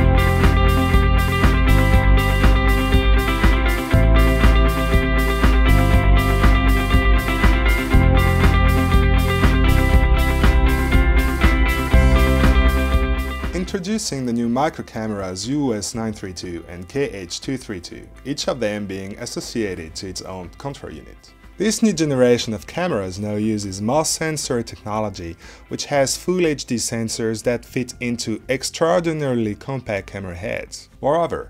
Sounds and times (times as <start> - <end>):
Music: 0.0 - 31.4
Speech: 13.6 - 31.4.